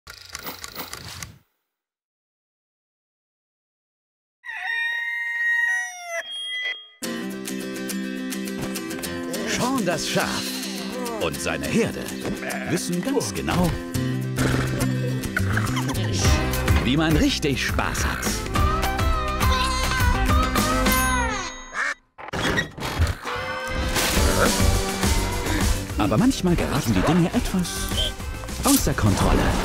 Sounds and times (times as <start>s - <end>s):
Music: 7.0s - 21.6s, 23.2s - 29.6s
Speech: 9.4s - 13.8s, 16.0s - 18.4s, 26.0s - 27.9s, 28.6s - 29.6s.